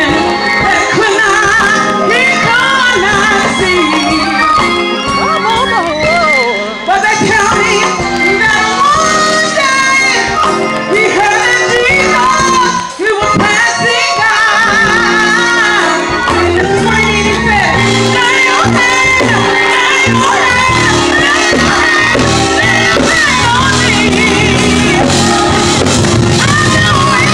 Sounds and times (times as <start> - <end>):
Female singing: 0.0 - 4.7, 5.7 - 25.3, 26.4 - 27.3
Music: 0.0 - 27.3.